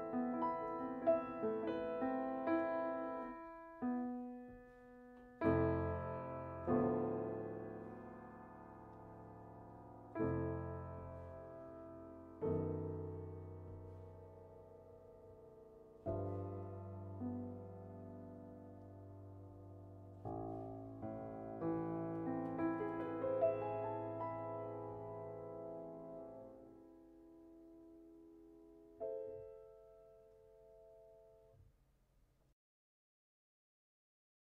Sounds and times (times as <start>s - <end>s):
Piano: 0.0s - 32.0s.